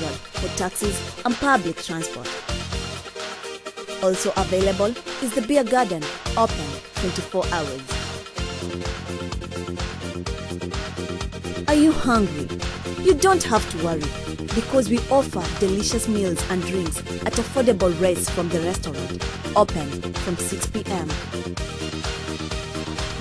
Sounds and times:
Speech: 0:00.0 - 0:02.3, 0:04.0 - 0:07.9, 0:11.7 - 0:21.2
Background music: 0:00.0 - 0:23.2
House music: 0:00.0 - 0:23.2.

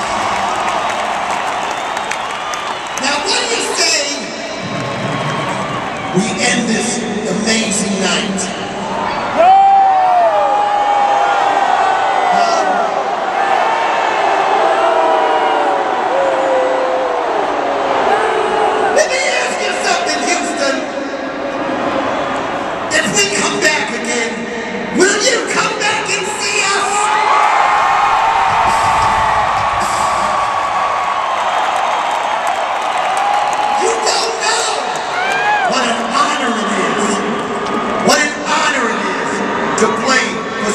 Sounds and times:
Speech: 0:06.2 - 0:08.6, 0:12.3 - 0:12.9, 0:19.0 - 0:20.9, 0:22.9 - 0:27.2, 0:33.8 - 0:35.0, 0:35.7 - 0:37.3, 0:38.0 - 0:40.7.

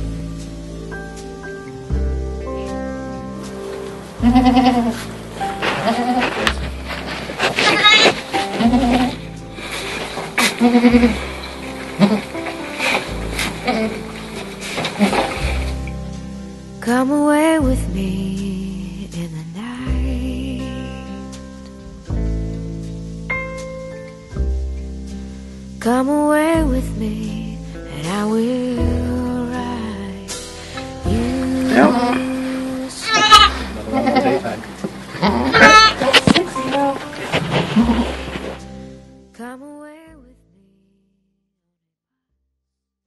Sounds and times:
Music: 0:00.0 - 0:42.3
Bleat: 0:04.2 - 0:05.1, 0:05.7 - 0:06.3, 0:07.6 - 0:09.2, 0:10.4 - 0:11.2, 0:12.0 - 0:12.3, 0:33.0 - 0:34.6, 0:35.2 - 0:37.0, 0:37.7 - 0:38.2
Domestic animals, pets: 0:05.6 - 0:06.6, 0:07.4 - 0:09.2, 0:10.1 - 0:13.0, 0:33.0 - 0:34.4, 0:35.2 - 0:38.2.

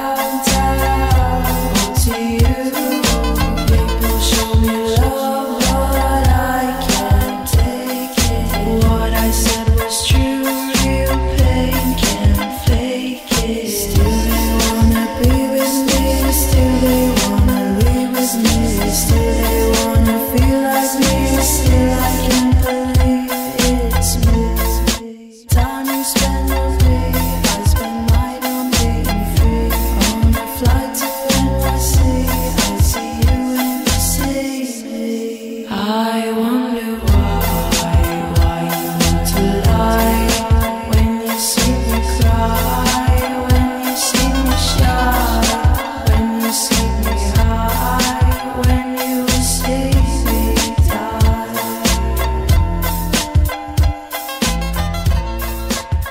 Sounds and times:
New-age music: 0:00.0 - 0:25.0, 0:25.6 - 0:56.1
Blues: 0:00.0 - 0:34.5, 0:37.0 - 0:56.1.

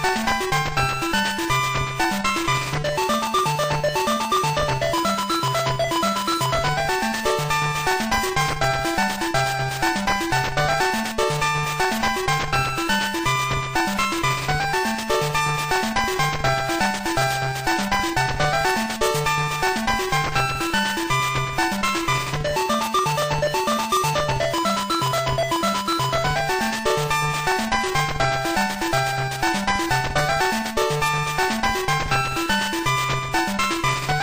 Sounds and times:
Video game music: 0:00.0 - 0:34.2.

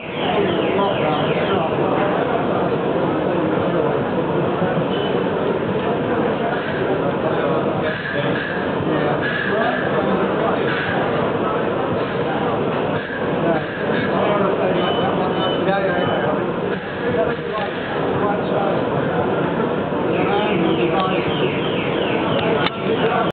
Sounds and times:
Speech: 0:00.0 - 0:23.3
Engine: 0:04.6 - 0:21.1.

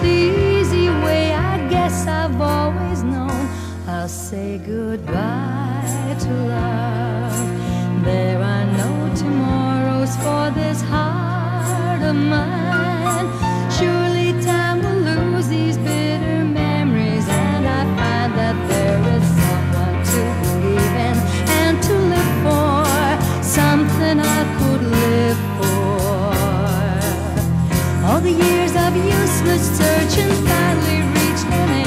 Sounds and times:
Soul music: 0:00.0 - 0:31.8.

